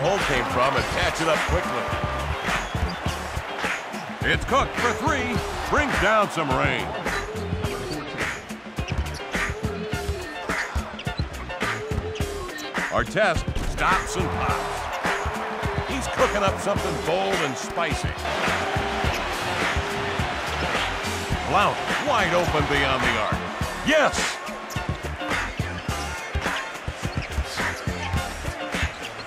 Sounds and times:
Speech: 0:00.0 - 0:02.0, 0:04.2 - 0:06.9, 0:12.9 - 0:14.6, 0:15.9 - 0:18.2, 0:21.5 - 0:24.4
Music: 0:00.0 - 0:29.2.

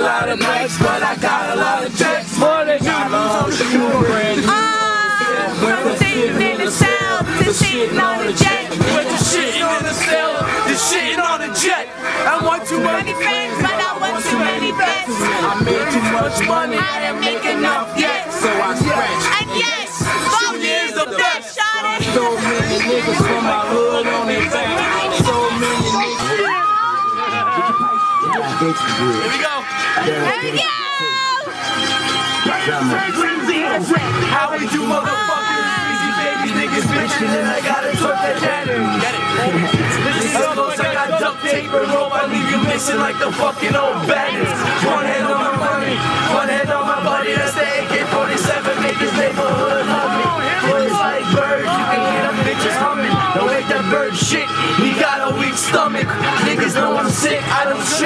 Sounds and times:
Music: 0:00.0 - 0:58.0.

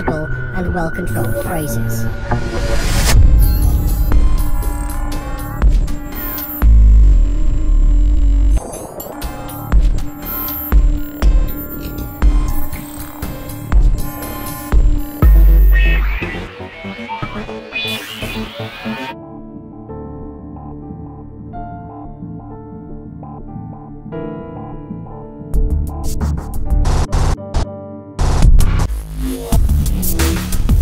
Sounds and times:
Techno: 0:00.0 - 0:19.2
Electronica: 0:00.0 - 0:19.4.

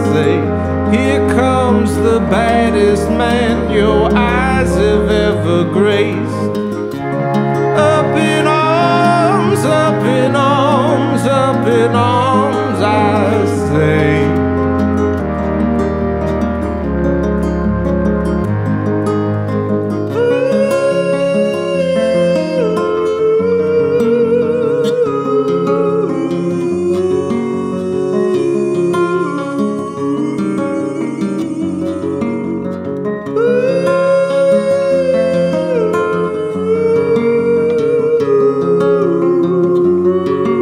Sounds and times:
Electric piano: 0:00.0 - 0:40.6.

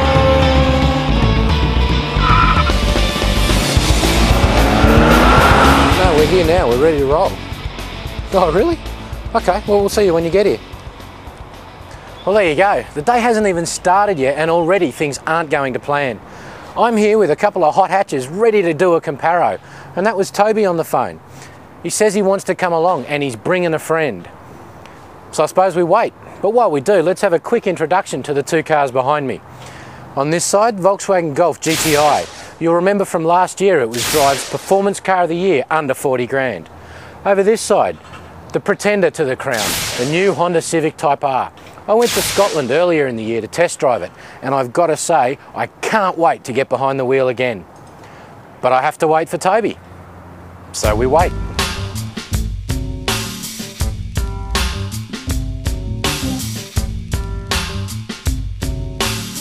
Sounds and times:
Speech: 0:05.9 - 0:07.4, 0:08.3 - 0:10.6, 0:12.2 - 0:16.2, 0:16.8 - 0:21.2, 0:21.8 - 0:24.4, 0:25.3 - 0:29.4, 0:30.2 - 0:47.6, 0:48.6 - 0:49.8, 0:50.7 - 0:51.3.

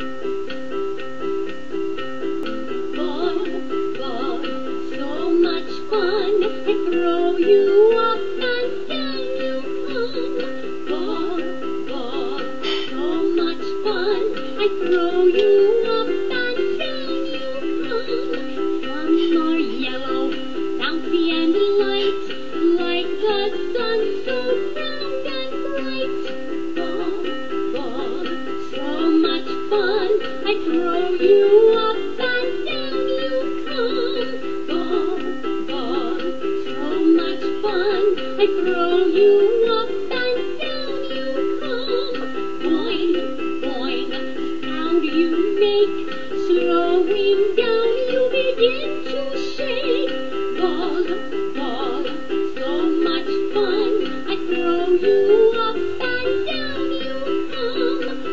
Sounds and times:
Music: 0:00.0 - 0:58.3.

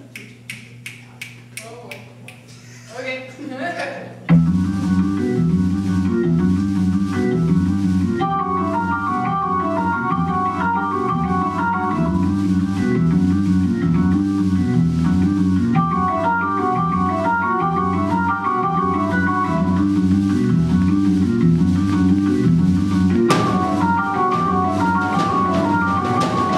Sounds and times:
Speech: 0:01.1 - 0:04.2
Music: 0:04.3 - 0:26.5.

